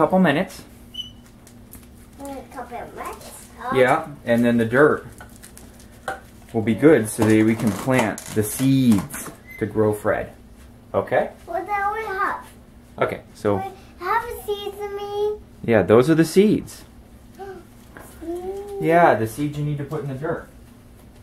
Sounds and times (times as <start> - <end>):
Child speech, kid speaking: 2.2 - 4.2, 6.6 - 7.4, 11.4 - 12.6, 13.5 - 15.5, 17.4 - 19.1.